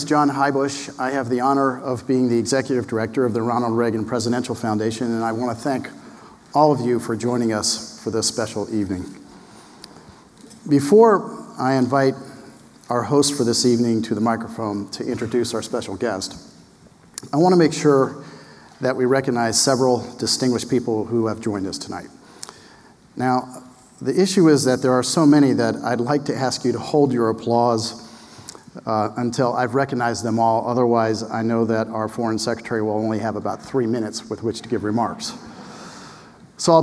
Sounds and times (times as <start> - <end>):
Male speech, man speaking: 0.0 - 9.2, 10.6 - 12.3, 12.9 - 16.5, 17.2 - 18.2, 18.8 - 22.2, 23.2 - 28.0, 28.8 - 35.4, 36.6 - 36.8.